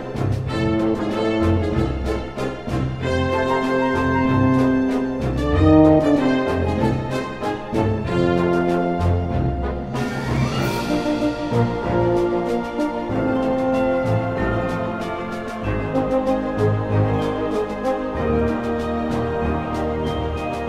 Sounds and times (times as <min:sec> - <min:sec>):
Orchestra: 0:00.0 - 0:20.6
Trombone: 0:00.0 - 0:20.6.